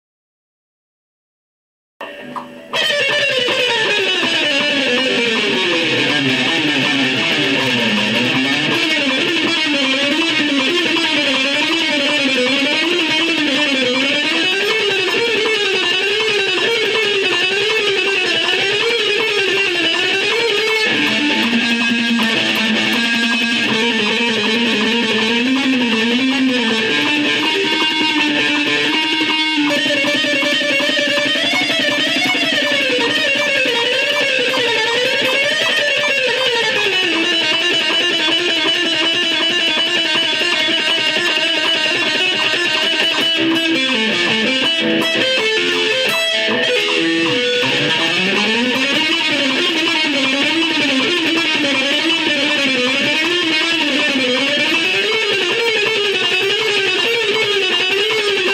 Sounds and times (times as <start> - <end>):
Strum: 2.0 - 58.4
Electric guitar: 2.0 - 58.5.